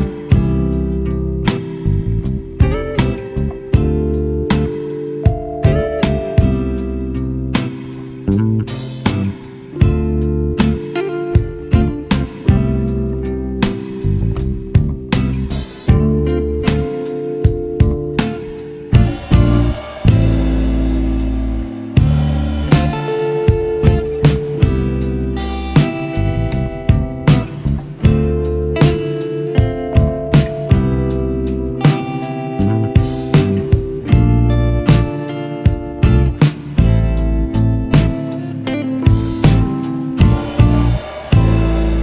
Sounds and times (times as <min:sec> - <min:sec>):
Music: 0:00.0 - 0:42.0.